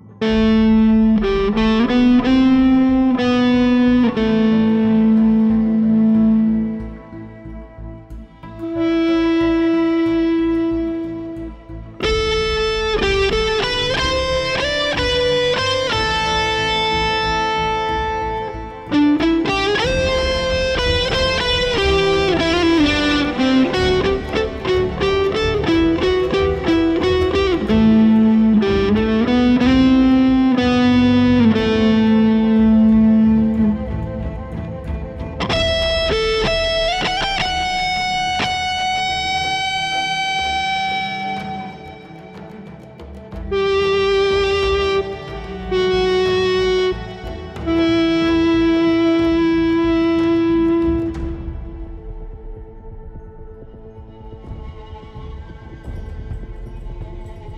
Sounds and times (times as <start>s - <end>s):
Electric guitar: 0.0s - 57.5s
Strum: 0.0s - 57.5s.